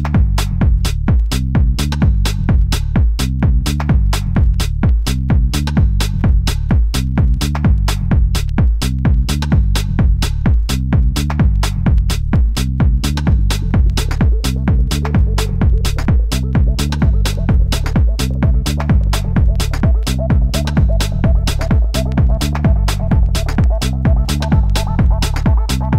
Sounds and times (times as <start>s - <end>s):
Techno: 0.0s - 25.9s.